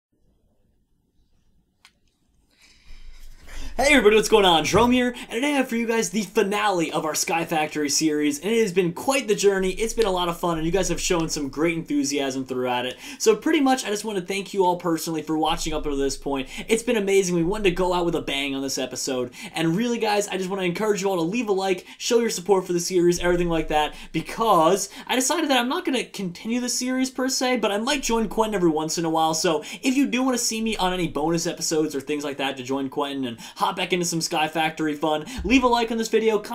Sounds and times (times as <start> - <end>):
Speech: 3.7 - 36.5.